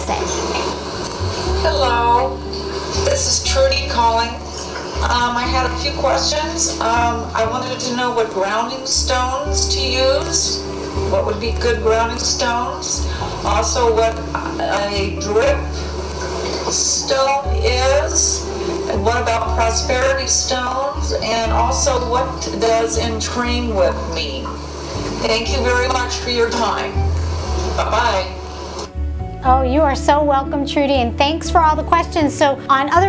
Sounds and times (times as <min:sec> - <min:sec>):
Music: 0:00.0 - 0:33.0
Speech: 0:05.0 - 0:15.7, 0:29.4 - 0:33.0.